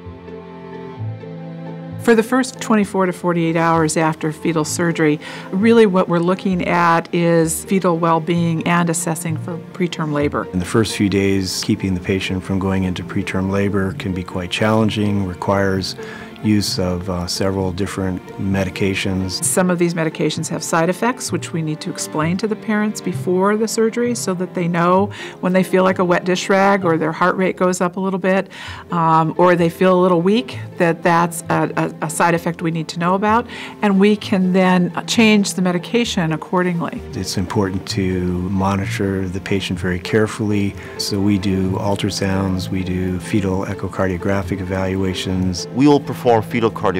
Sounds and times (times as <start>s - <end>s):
Music: 0.0s - 46.9s
Speech: 2.0s - 46.9s.